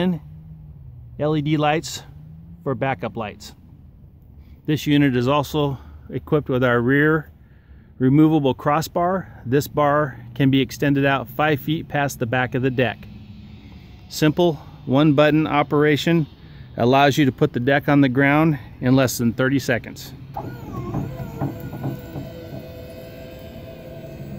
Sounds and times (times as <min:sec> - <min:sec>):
Speech: 0:00.0 - 0:00.3, 0:01.2 - 0:03.6, 0:04.7 - 0:07.3, 0:08.0 - 0:13.1, 0:14.1 - 0:20.2.